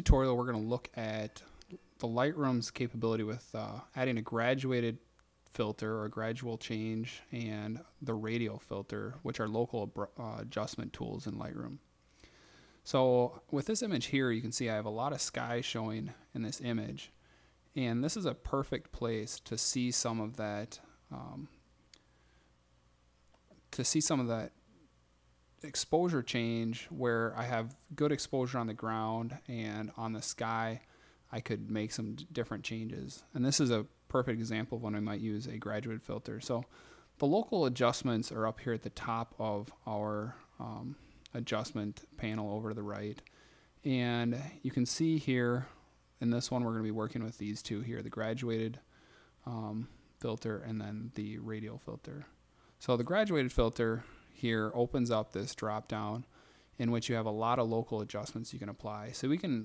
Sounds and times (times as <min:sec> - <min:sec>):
Speech: 0:00.0 - 0:11.9, 0:12.8 - 0:21.6, 0:23.7 - 0:24.6, 0:25.6 - 0:59.6.